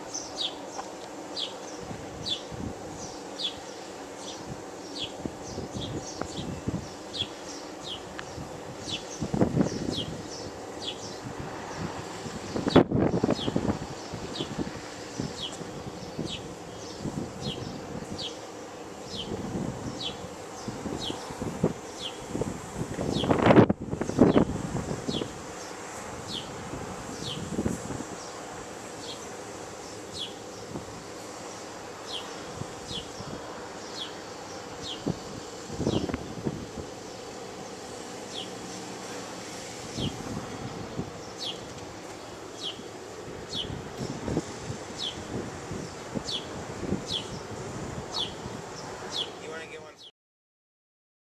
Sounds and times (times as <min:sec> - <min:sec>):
Outside, rural or natural: 0:00.0 - 0:50.1
Speech: 0:49.4 - 0:50.1.